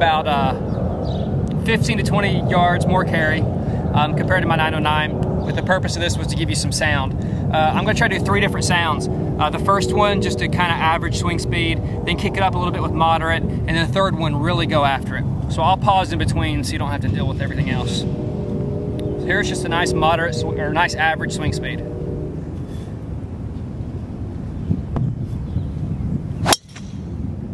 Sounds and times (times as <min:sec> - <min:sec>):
Speech: 0:00.0 - 0:00.6, 0:01.6 - 0:18.0, 0:19.2 - 0:21.8.